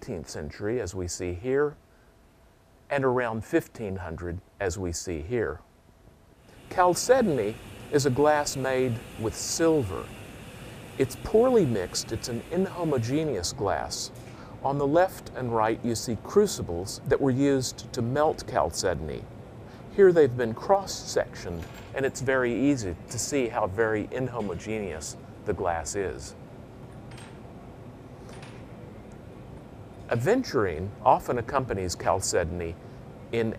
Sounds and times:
Speech: 0.0s - 1.8s, 2.9s - 5.6s, 6.7s - 10.1s, 11.0s - 19.3s, 19.9s - 26.4s, 30.1s - 33.5s.

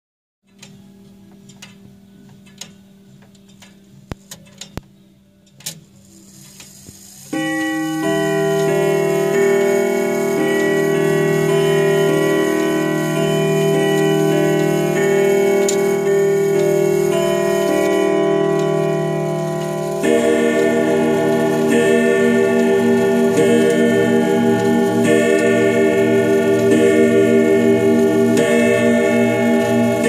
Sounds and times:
Tubular bells: 7.3s - 30.0s.

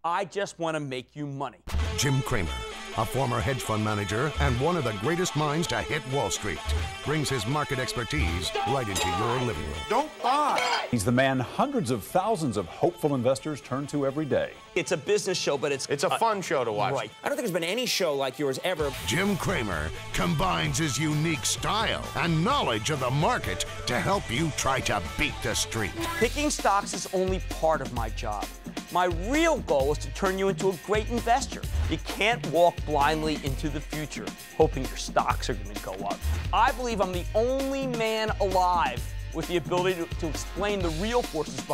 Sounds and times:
Speech: 0.0s - 41.7s
Music: 1.5s - 41.7s.

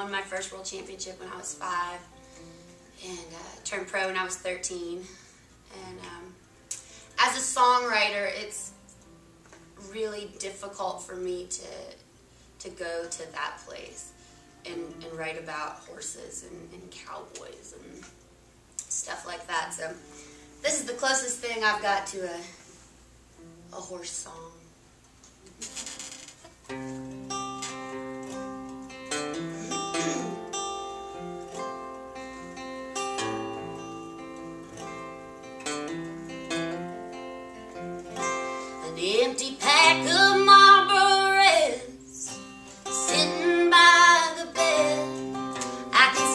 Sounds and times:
Guitar: 0.0s - 46.3s.

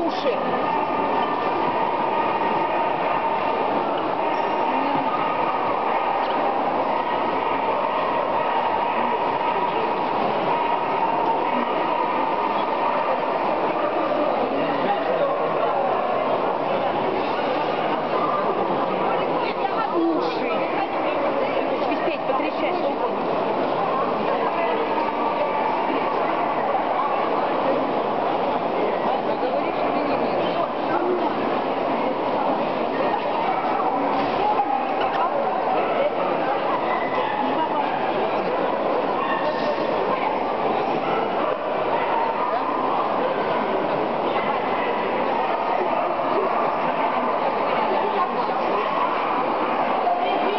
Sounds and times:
Speech: 0.0s - 50.5s.

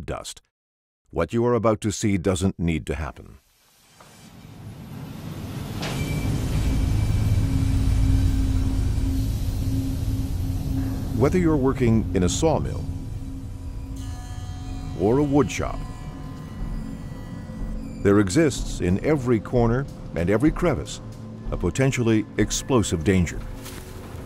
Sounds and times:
Speech: 0.0s - 0.4s, 1.1s - 3.4s, 11.2s - 12.9s, 15.0s - 15.8s, 18.1s - 23.5s.

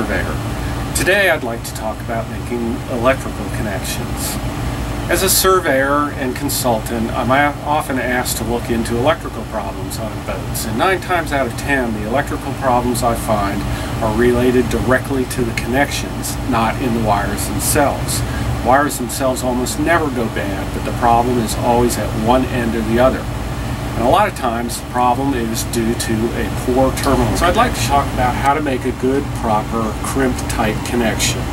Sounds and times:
Speech: 0.0s - 4.4s, 5.1s - 23.3s, 24.0s - 31.5s.

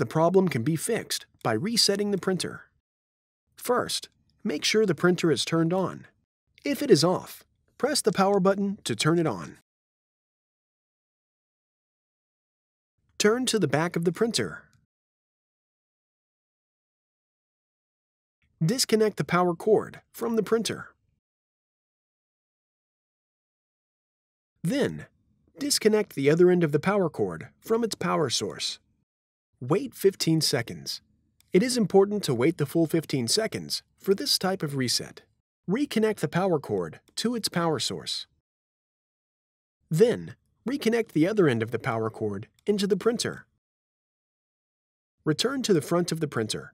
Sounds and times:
Speech: 0.0s - 2.7s, 3.6s - 9.6s, 13.2s - 14.7s, 18.6s - 21.0s, 24.6s - 28.8s, 29.6s - 38.3s, 39.9s - 43.5s, 45.3s - 46.7s.

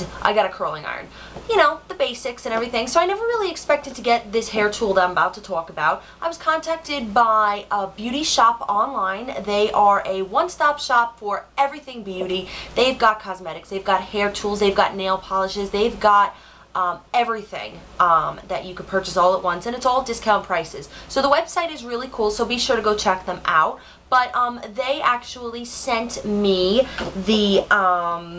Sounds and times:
Speech: 0.0s - 28.3s.

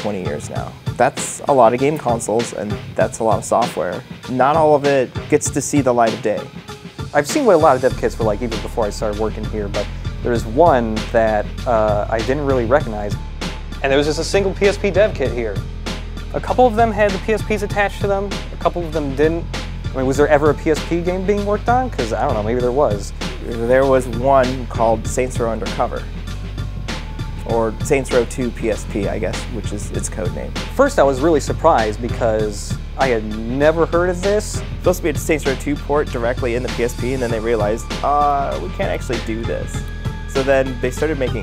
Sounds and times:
Speech: 0.0s - 6.5s, 7.1s - 13.2s, 13.8s - 15.6s, 16.4s - 26.1s, 27.4s - 41.4s
Music: 0.0s - 41.4s.

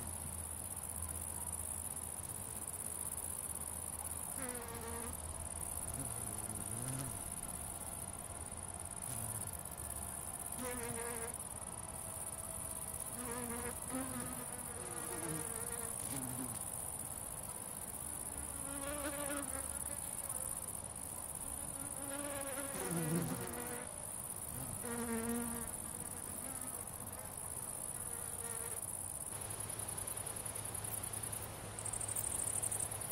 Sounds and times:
Cricket: 0.0s - 33.1s
Bee, wasp, etc.: 2.5s - 33.1s
Fly, housefly: 4.0s - 33.1s
Mosquito: 5.8s - 7.5s, 9.0s - 9.7s, 13.2s - 16.7s, 21.7s - 23.9s, 24.5s - 27.2s.

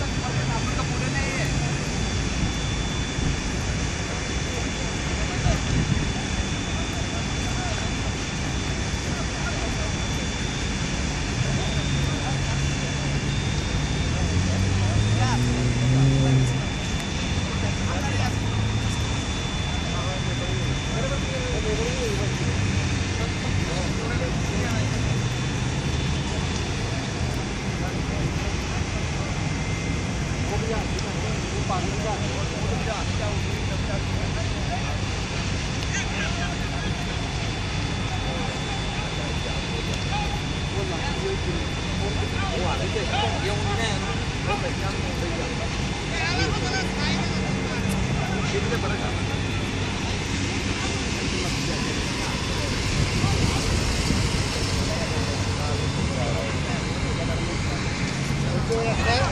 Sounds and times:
Speech: 0.0s - 59.3s.

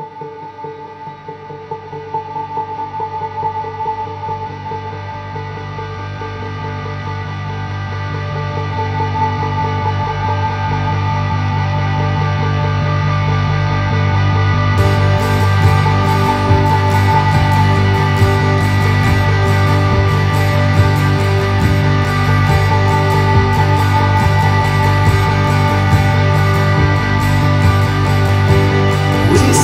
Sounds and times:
Music: 0.0s - 29.6s.

